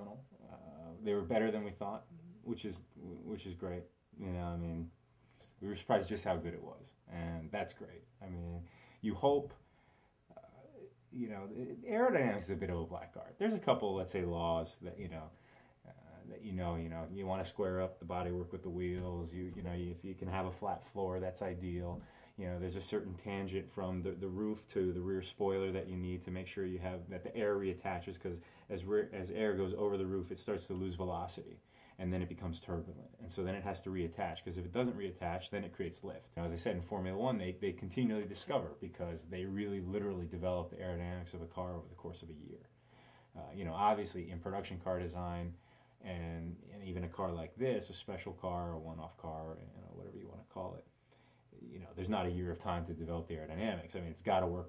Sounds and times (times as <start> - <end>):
Speech: 0.0 - 9.6, 10.3 - 42.7, 43.3 - 50.9, 51.5 - 54.6.